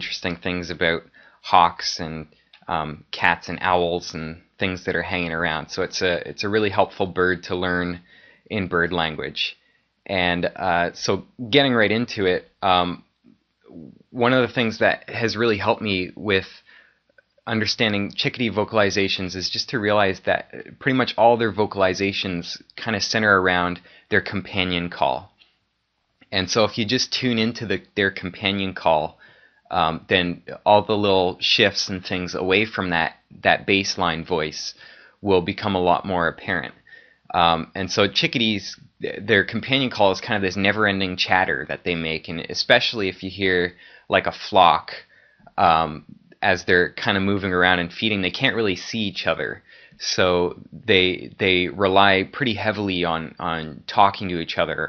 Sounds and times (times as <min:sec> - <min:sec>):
Narration, monologue: 0:00.0 - 0:54.8.